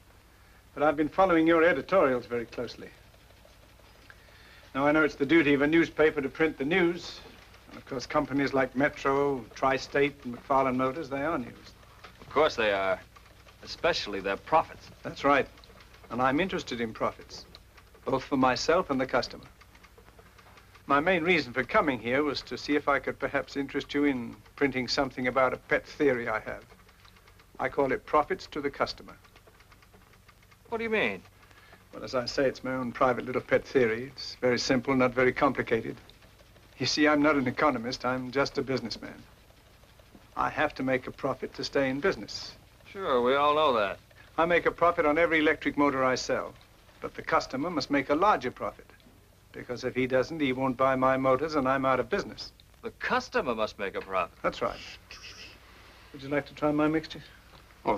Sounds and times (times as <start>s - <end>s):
Male speech, man speaking: 0.8s - 3.0s, 4.7s - 15.5s, 16.1s - 19.5s, 20.9s - 26.7s, 27.6s - 29.2s, 30.7s - 31.2s, 31.9s - 36.0s, 36.8s - 39.3s, 40.4s - 48.9s, 49.5s - 55.5s, 56.1s - 57.9s.